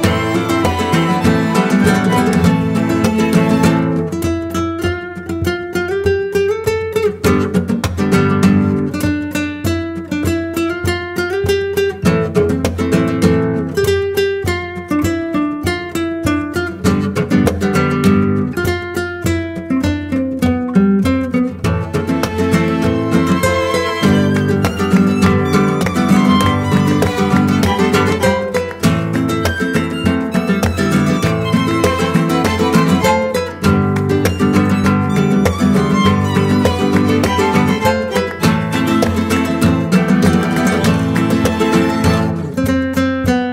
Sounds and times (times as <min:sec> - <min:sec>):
Music: 0:00.0 - 0:43.5.